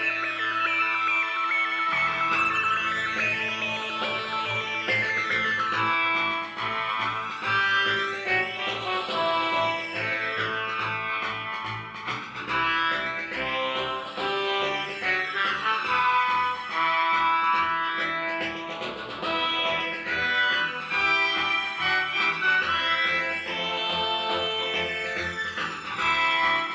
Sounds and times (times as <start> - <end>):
Video game music: 1.4 - 26.7.